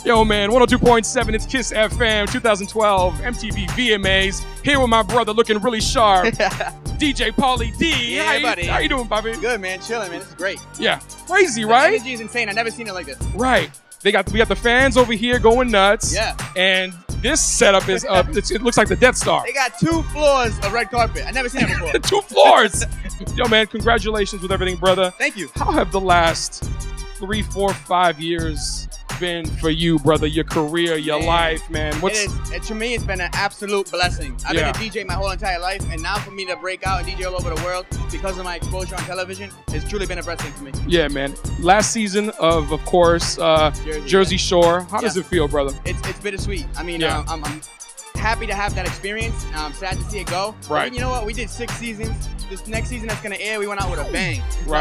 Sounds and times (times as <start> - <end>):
Speech: 0.0 - 26.6, 27.2 - 47.6, 48.2 - 54.8
Music: 0.0 - 54.8.